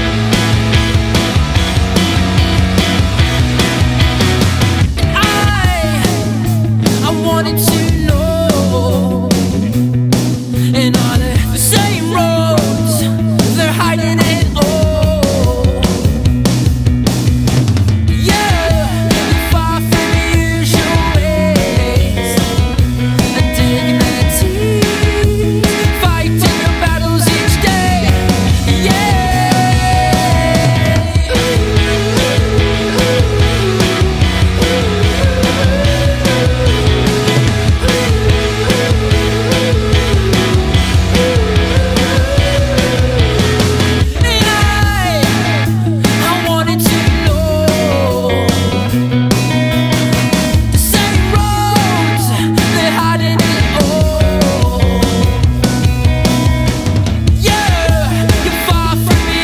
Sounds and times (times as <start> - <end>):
Jazz: 0.0 - 59.4.